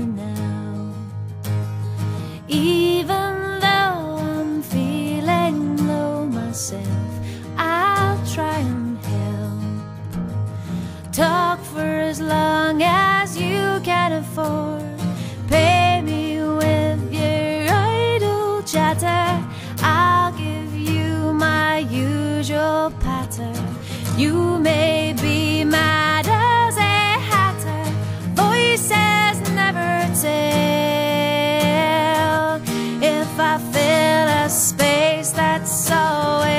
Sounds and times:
Music: 0:00.0 - 0:36.5.

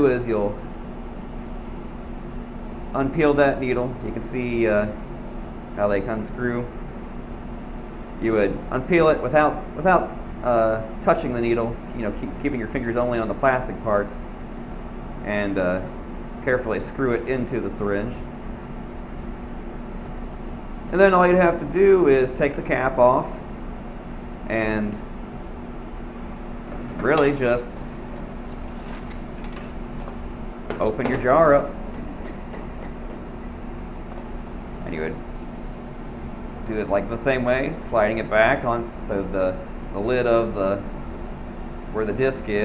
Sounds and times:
Speech: 0:00.0 - 0:00.6, 0:02.9 - 0:05.0, 0:05.8 - 0:06.8, 0:08.2 - 0:14.2, 0:15.2 - 0:18.3, 0:20.9 - 0:23.4, 0:24.5 - 0:25.0, 0:27.0 - 0:27.8, 0:30.7 - 0:31.8, 0:34.8 - 0:35.2, 0:36.6 - 0:40.9, 0:41.9 - 0:42.6.

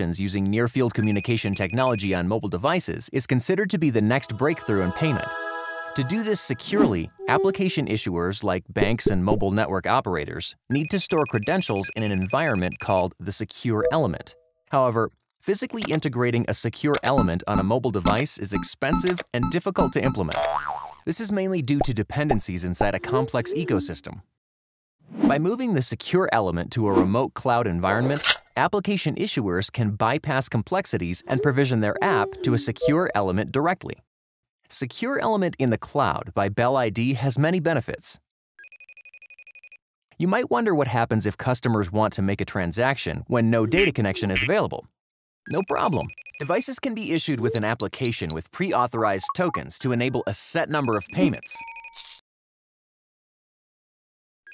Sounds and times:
Speech: 0:00.0 - 0:05.4, 0:06.0 - 0:20.5, 0:21.1 - 0:24.3, 0:25.3 - 0:34.0, 0:34.7 - 0:38.3, 0:40.2 - 0:44.9, 0:45.5 - 0:51.6.

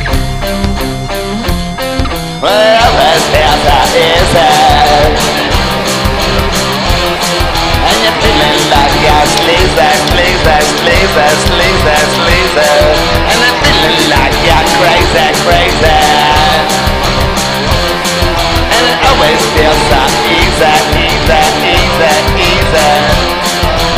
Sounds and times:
Psychedelic rock: 0:00.0 - 0:23.9.

